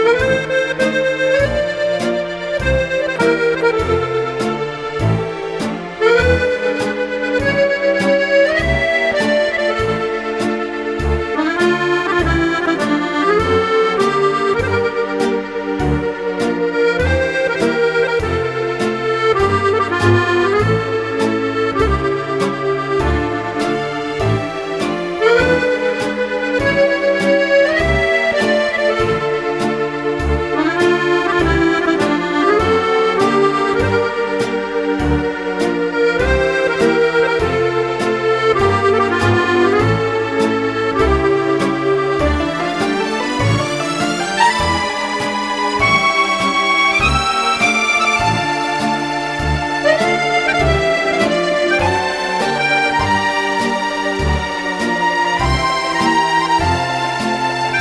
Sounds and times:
Music: 0:00.0 - 0:57.8.

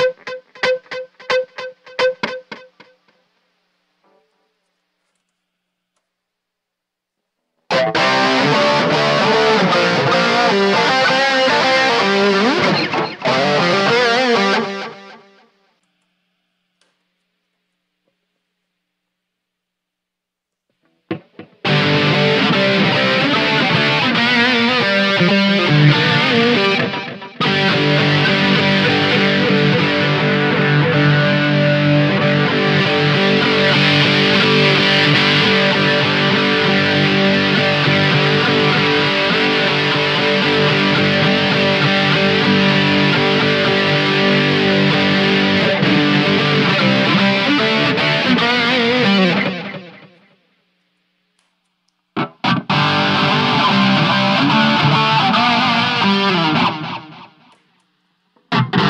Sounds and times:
Electric guitar: 0:00.0 - 0:03.1, 0:07.7 - 0:15.5, 0:20.8 - 0:50.5, 0:52.2 - 0:57.8, 0:58.4 - 0:58.8.

